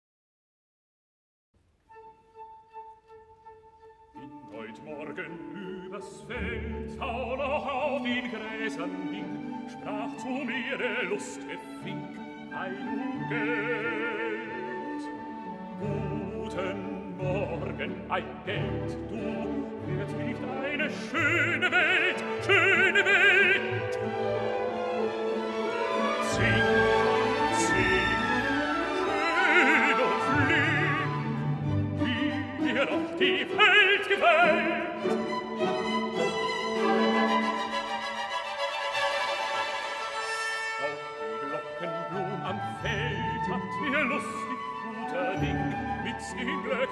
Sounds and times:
Music: 1.6 - 46.9.

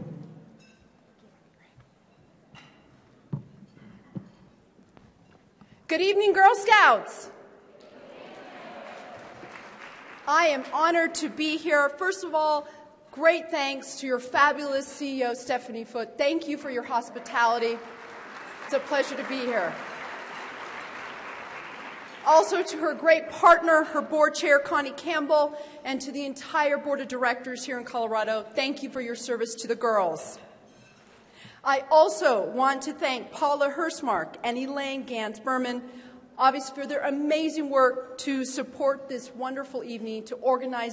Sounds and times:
Narration, monologue: 4.5 - 7.9, 10.1 - 19.9, 22.1 - 40.9
Female speech, woman speaking: 5.9 - 7.3, 10.3 - 12.6, 13.2 - 17.8, 18.7 - 19.8, 22.2 - 30.4, 31.7 - 35.8, 36.4 - 40.9.

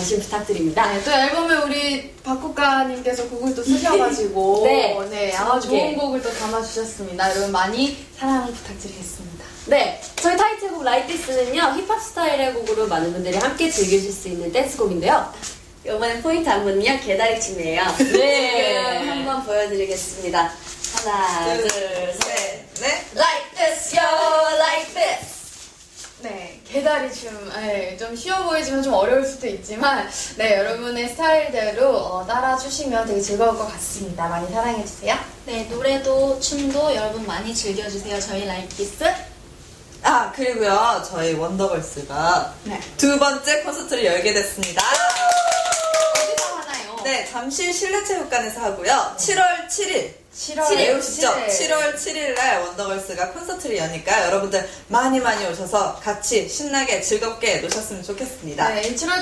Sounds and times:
Speech: 0.0 - 25.5, 46.3 - 59.2.

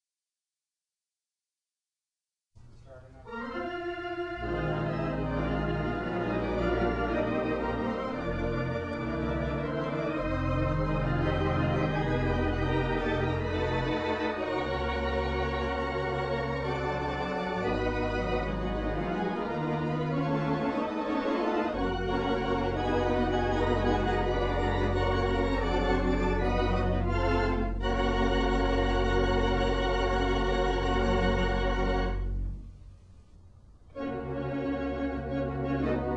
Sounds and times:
Music: 2.6 - 36.1.

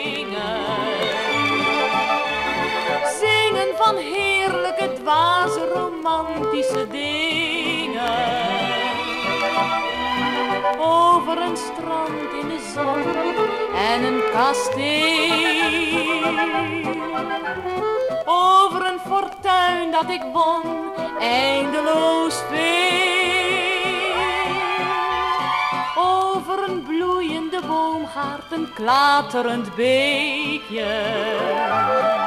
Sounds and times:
Orchestra: 0.0 - 32.2.

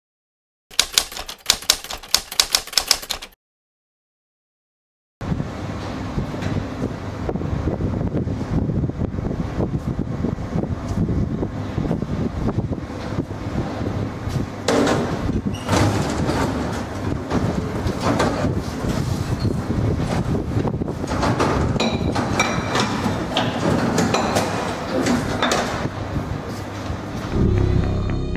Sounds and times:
Typewriter: 0.7 - 3.4.

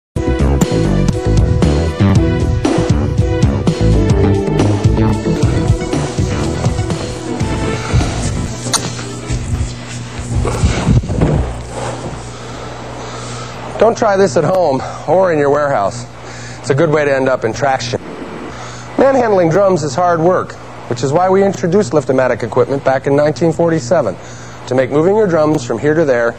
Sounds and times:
Trance music: 0.4 - 10.8.

